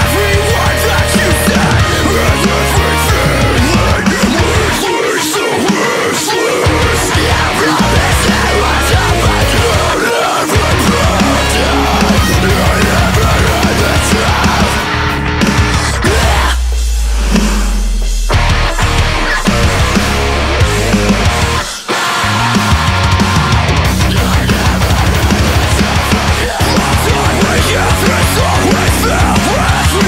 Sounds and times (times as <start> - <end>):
Music: 0.0 - 30.0.